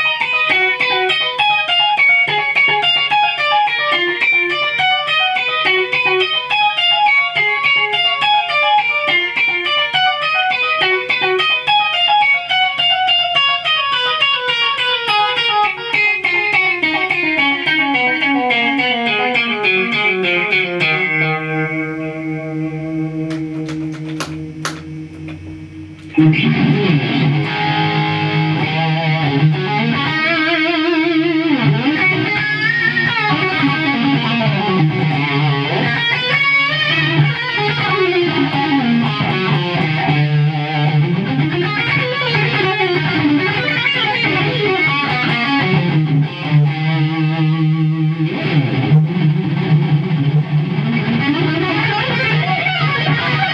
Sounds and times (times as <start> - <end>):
Bass guitar: 15.9 - 53.5
Strum: 20.5 - 53.5.